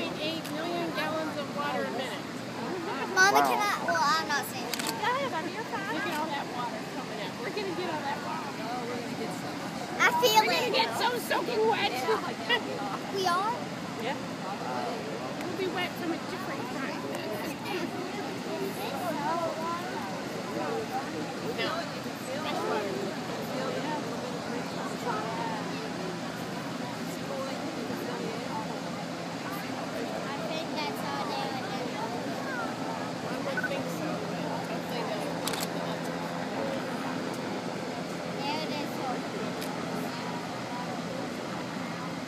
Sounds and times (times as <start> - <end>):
Stream: 0.0 - 42.2.